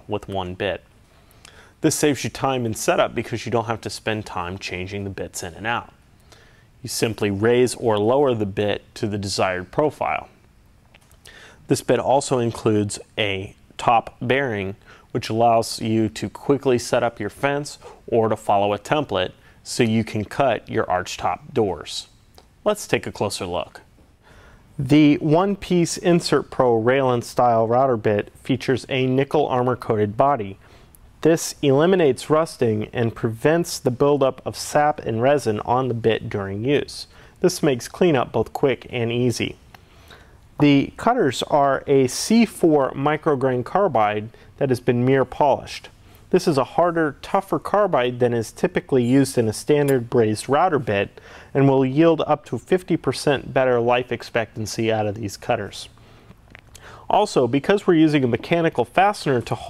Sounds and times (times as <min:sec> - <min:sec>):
Speech: 0:00.0 - 0:00.9, 0:01.8 - 0:06.0, 0:06.8 - 0:10.4, 0:11.7 - 0:23.9, 0:24.8 - 0:30.6, 0:31.2 - 0:39.6, 0:40.6 - 0:56.0, 0:57.0 - 0:59.7.